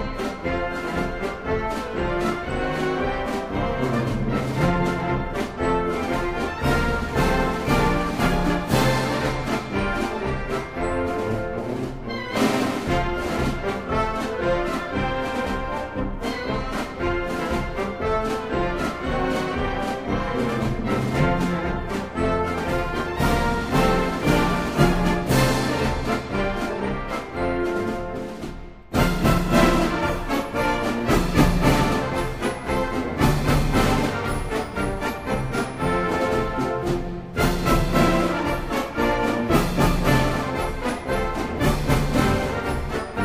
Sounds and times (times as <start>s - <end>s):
Orchestra: 0.0s - 43.2s.